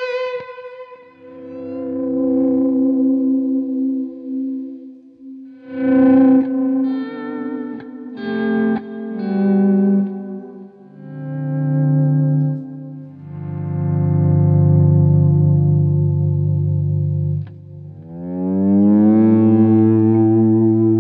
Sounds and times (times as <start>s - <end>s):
Distortion: 0.0s - 21.0s
Effects unit: 0.0s - 21.0s
Guitar: 0.0s - 21.0s.